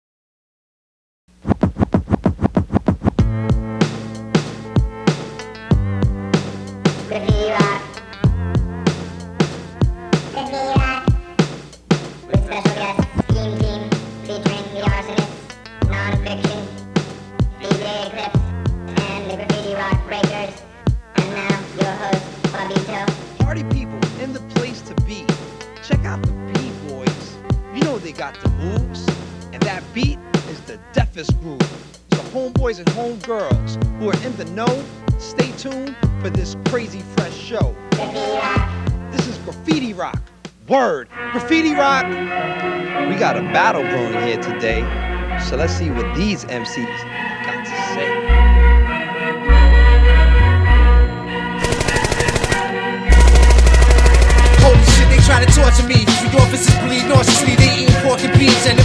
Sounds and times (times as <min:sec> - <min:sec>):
Hip hop music: 0:03.2 - 0:09.2, 0:12.2 - 0:20.5, 0:21.1 - 0:46.4, 0:51.7 - 0:58.8.